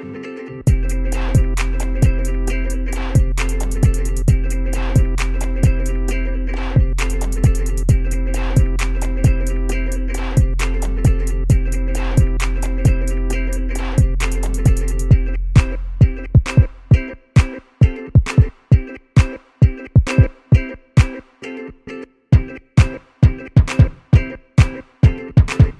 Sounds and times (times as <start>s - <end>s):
Music: 0.0s - 25.7s.